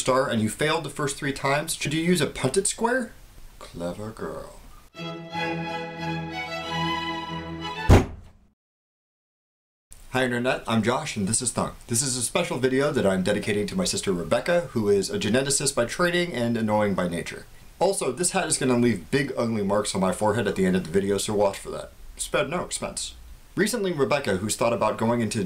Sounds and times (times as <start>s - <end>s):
Speech: 0.0s - 4.7s, 10.1s - 25.4s
Music: 4.9s - 8.1s
Thunk: 7.9s - 8.4s.